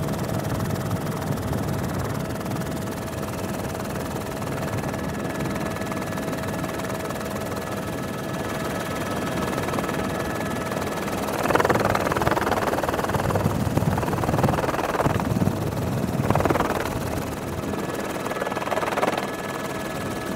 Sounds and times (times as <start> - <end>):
Helicopter: 0.0 - 20.3.